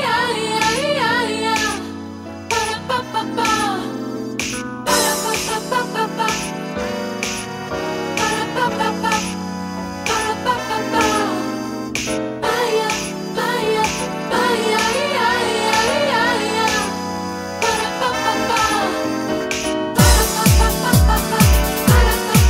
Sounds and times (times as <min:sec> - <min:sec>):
Music: 0:00.0 - 0:22.5.